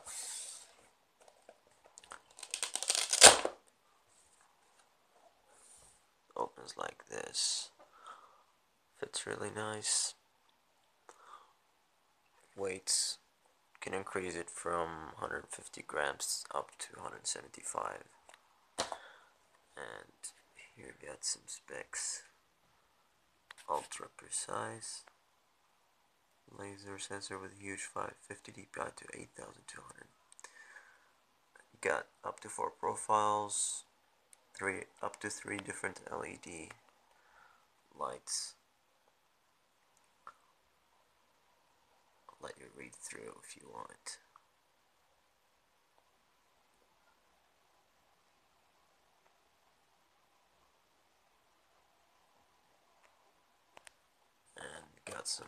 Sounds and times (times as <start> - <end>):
Speech: 6.3 - 7.8, 9.0 - 10.2, 12.4 - 18.2, 19.8 - 22.4, 23.6 - 25.1, 26.5 - 30.1, 31.6 - 33.9, 34.6 - 36.8, 37.9 - 38.6, 42.3 - 44.3, 54.5 - 55.4.